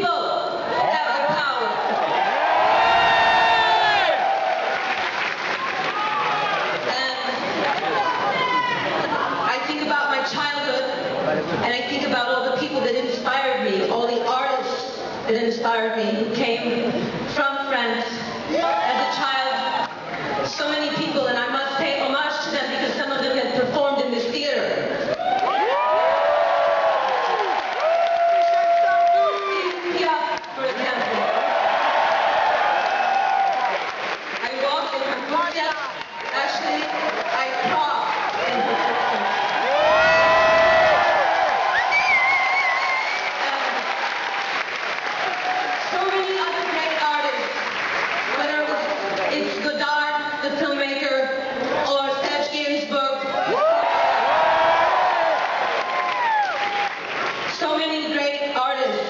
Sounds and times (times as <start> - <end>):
Female speech, woman speaking: 0.0 - 1.8, 6.9 - 7.4, 9.1 - 19.9, 20.5 - 25.0, 29.2 - 31.3, 34.4 - 38.9, 43.4 - 43.9, 45.8 - 47.6, 48.3 - 53.4, 57.6 - 59.0.